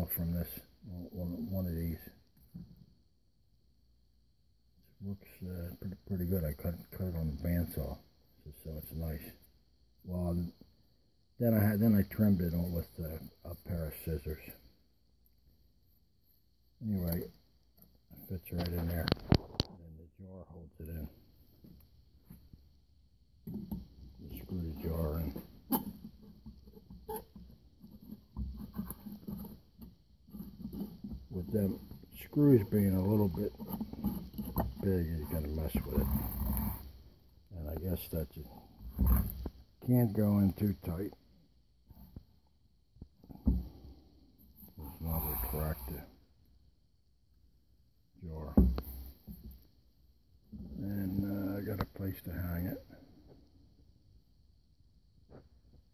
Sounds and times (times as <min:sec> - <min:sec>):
Speech: 0:00.0 - 0:02.2, 0:04.8 - 0:09.4, 0:10.0 - 0:10.6, 0:11.4 - 0:14.6, 0:16.8 - 0:17.4, 0:18.1 - 0:21.2, 0:24.2 - 0:25.5, 0:31.3 - 0:33.7, 0:34.6 - 0:36.4, 0:37.5 - 0:38.6, 0:39.8 - 0:41.2, 0:44.8 - 0:46.2, 0:48.2 - 0:48.8, 0:50.7 - 0:53.0.